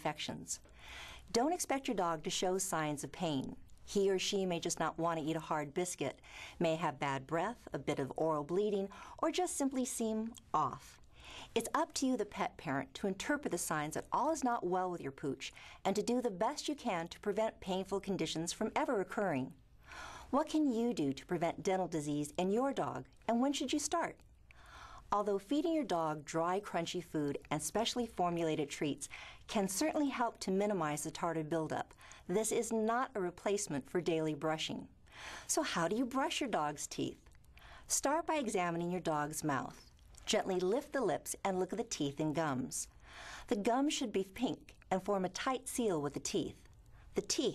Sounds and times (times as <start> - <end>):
Speech: 0.0 - 0.6, 1.3 - 11.0, 11.6 - 19.6, 20.3 - 24.2, 25.1 - 34.9, 35.5 - 37.3, 37.9 - 42.9, 43.5 - 47.5.